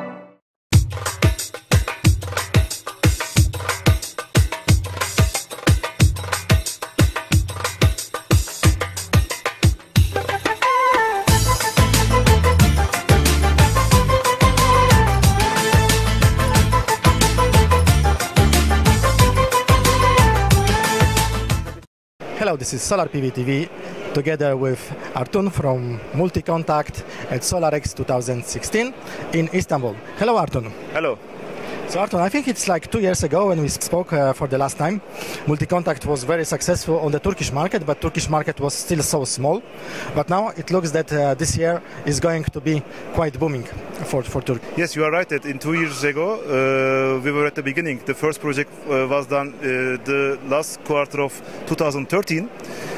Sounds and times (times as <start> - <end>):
Music: 0.0 - 21.9
Speech: 22.3 - 31.2, 31.9 - 39.6, 40.2 - 52.5.